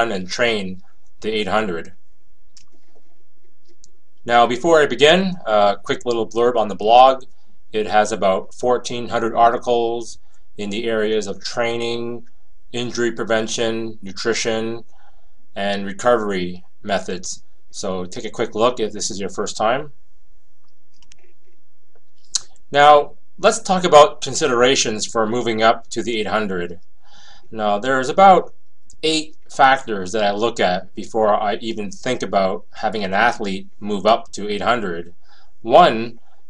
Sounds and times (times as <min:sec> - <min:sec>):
Speech: 0:00.0 - 0:01.9, 0:04.3 - 0:07.2, 0:07.8 - 0:12.2, 0:12.8 - 0:14.8, 0:15.6 - 0:19.9, 0:22.7 - 0:26.8, 0:27.5 - 0:35.1, 0:35.7 - 0:36.2.